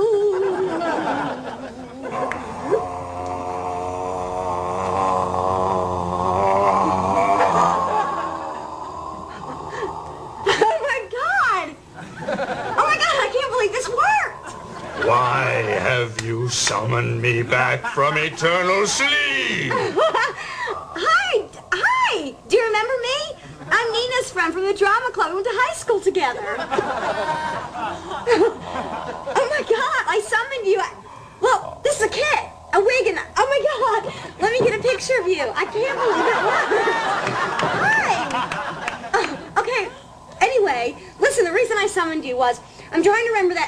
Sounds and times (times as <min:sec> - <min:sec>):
Speech: 0:15.0 - 0:19.8.